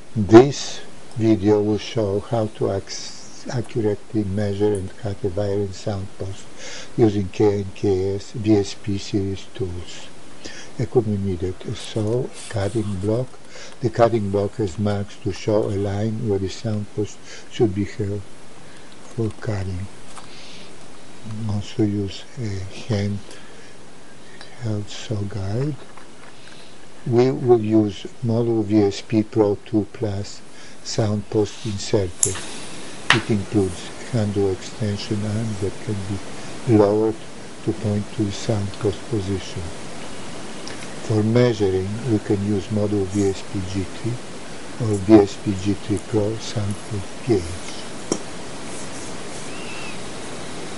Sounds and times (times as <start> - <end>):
Speech: 0.2 - 18.3, 19.1 - 19.9, 21.2 - 23.4, 24.4 - 25.8, 27.0 - 32.4, 33.1 - 39.8, 41.0 - 44.2, 44.8 - 47.9.